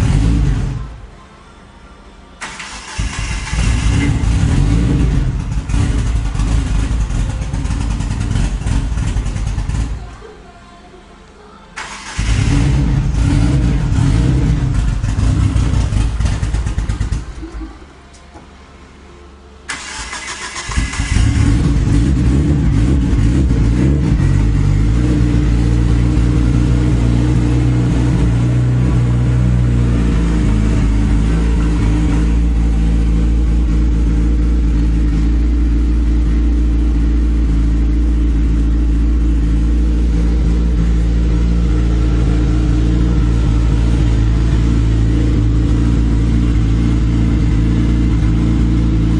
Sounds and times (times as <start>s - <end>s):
Medium engine (mid frequency): 0.0s - 10.5s, 11.8s - 49.1s
Engine starting: 2.4s - 4.2s, 11.8s - 12.8s, 19.7s - 21.6s.